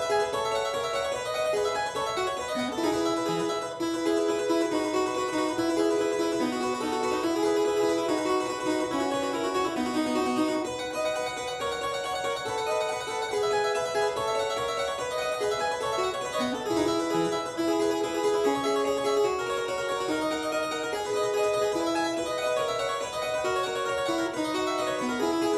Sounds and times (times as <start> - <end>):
Harpsichord: 0.0 - 25.5.